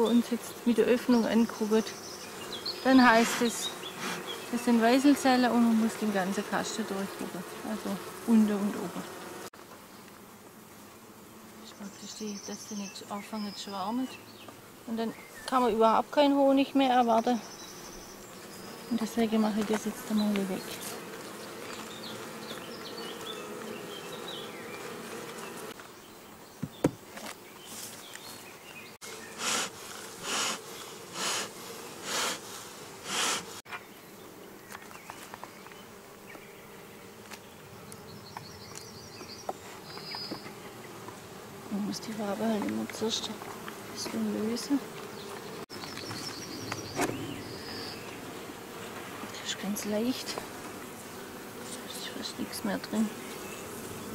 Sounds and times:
Bee, wasp, etc.: 0:00.0 - 0:54.1
Fly, housefly: 0:00.0 - 0:54.1.

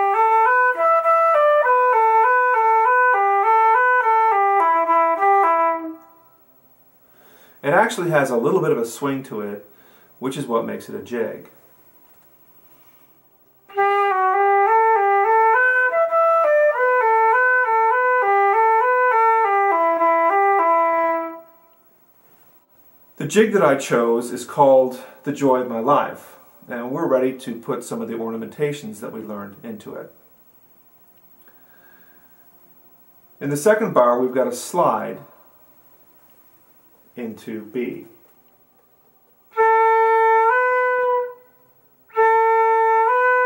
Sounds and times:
Music: 0:00.0 - 0:06.6, 0:13.6 - 0:22.0, 0:38.0 - 0:43.4
Speech: 0:07.6 - 0:11.6, 0:23.2 - 0:30.2, 0:33.4 - 0:35.4, 0:37.2 - 0:38.2.

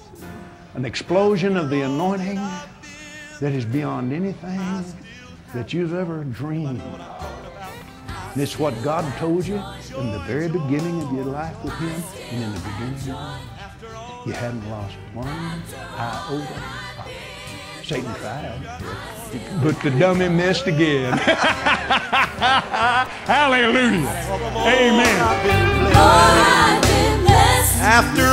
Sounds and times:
Music: 0:00.0 - 0:28.3.

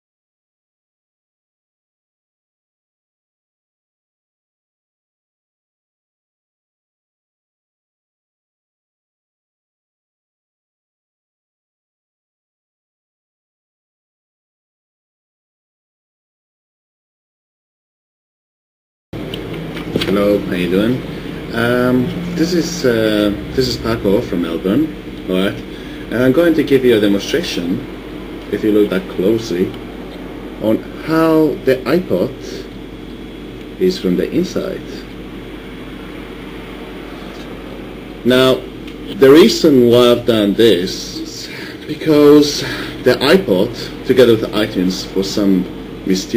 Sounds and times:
Speech: 0:20.0 - 0:27.9, 0:28.5 - 0:29.8, 0:30.6 - 0:32.7, 0:33.8 - 0:35.2, 0:38.2 - 0:46.3.

